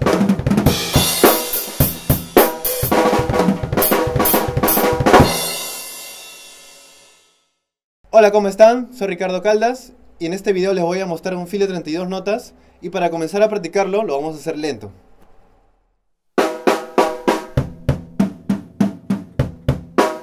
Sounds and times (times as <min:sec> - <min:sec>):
Music: 0:00.0 - 0:07.7, 0:16.4 - 0:20.2
Speech: 0:08.1 - 0:15.0.